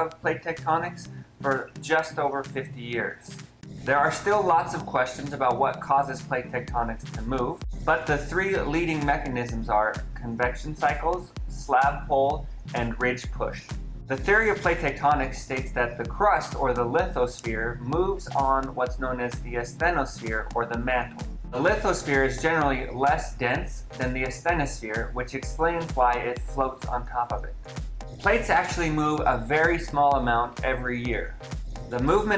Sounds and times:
Speech: 0.0 - 3.3, 3.9 - 27.6, 28.2 - 32.3
Music: 0.0 - 32.3.

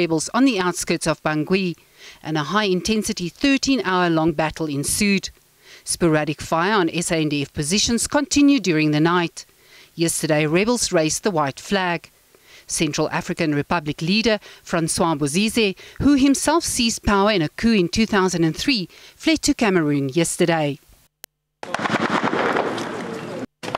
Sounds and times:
Speech: 0.0 - 9.4, 10.0 - 12.1, 12.7 - 20.8.

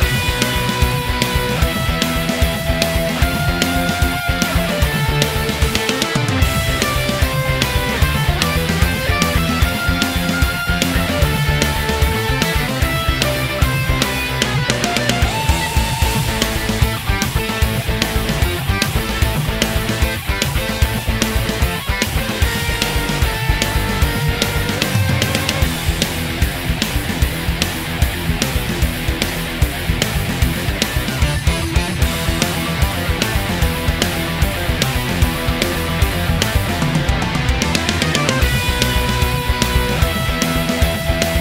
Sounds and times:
Soundtrack music: 0.0 - 41.4.

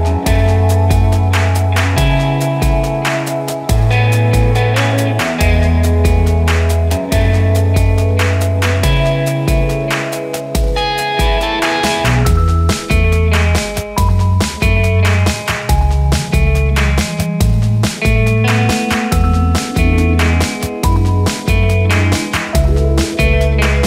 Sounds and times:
Music: 0.0 - 23.8.

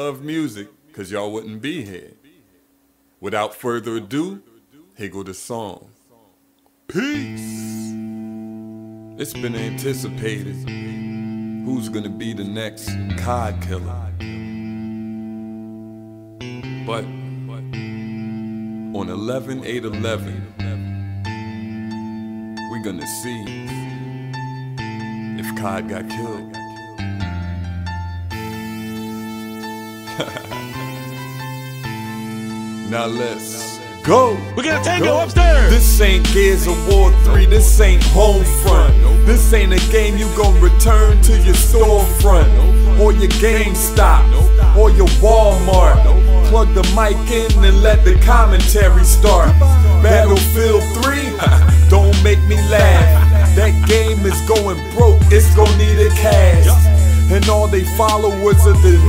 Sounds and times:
Speech: 0.0 - 2.2, 3.2 - 6.3, 6.9 - 8.0, 9.2 - 10.6, 11.6 - 14.1, 16.9 - 17.6, 19.0 - 20.8, 22.7 - 23.6, 25.4 - 26.5, 32.9 - 37.1, 44.8 - 59.0
Music: 6.9 - 59.0.

